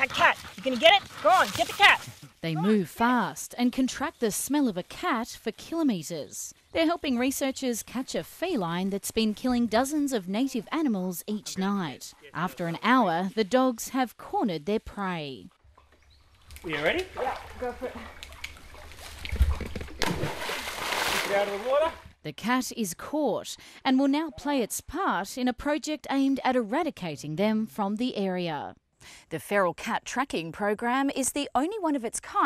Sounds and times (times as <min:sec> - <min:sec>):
Speech: 0:00.0 - 0:15.5, 0:21.3 - 0:28.7, 0:29.3 - 0:32.4.